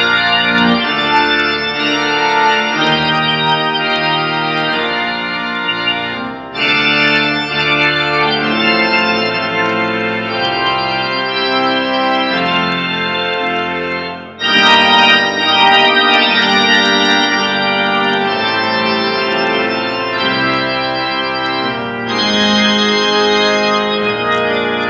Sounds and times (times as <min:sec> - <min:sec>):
Organ: 0:00.0 - 0:24.9
Piano: 0:00.0 - 0:24.9.